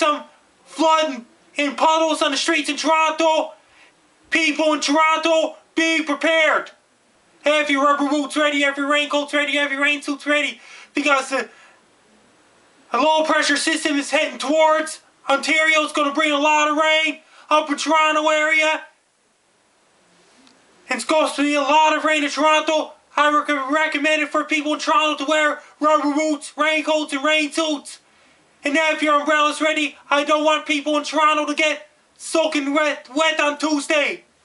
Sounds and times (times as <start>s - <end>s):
Speech: 0.0s - 3.6s, 4.3s - 6.8s, 7.4s - 11.5s, 12.9s - 19.0s, 20.8s - 34.3s.